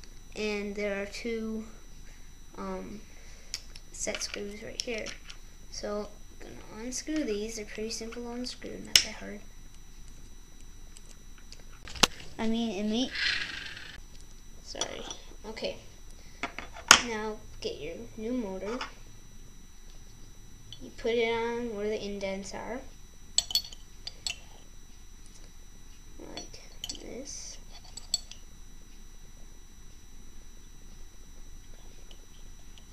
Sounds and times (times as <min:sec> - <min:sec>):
Speech: 0:00.4 - 0:01.8, 0:02.6 - 0:03.0, 0:04.0 - 0:05.1, 0:05.8 - 0:09.4, 0:12.4 - 0:13.1, 0:14.7 - 0:15.9, 0:17.0 - 0:18.9, 0:20.8 - 0:22.9, 0:26.2 - 0:27.6.